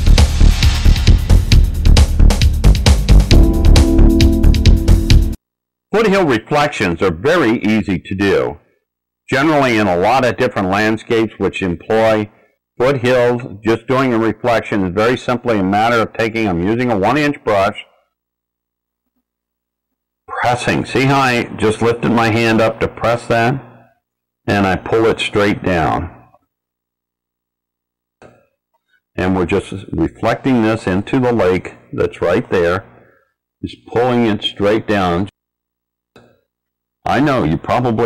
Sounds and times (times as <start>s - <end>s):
Music: 0.0s - 5.4s
Speech: 5.9s - 8.6s, 9.3s - 18.0s, 20.3s - 23.8s, 24.5s - 26.3s, 29.2s - 32.9s, 33.6s - 35.4s, 37.1s - 38.0s.